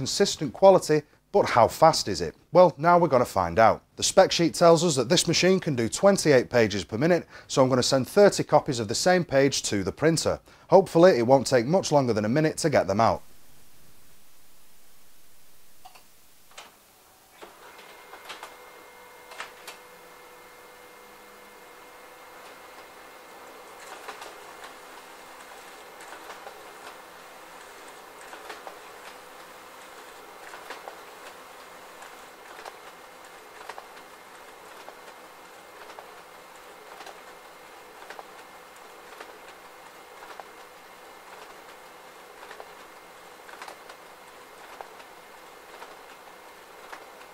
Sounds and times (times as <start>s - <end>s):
Printer: 16.5s - 47.3s.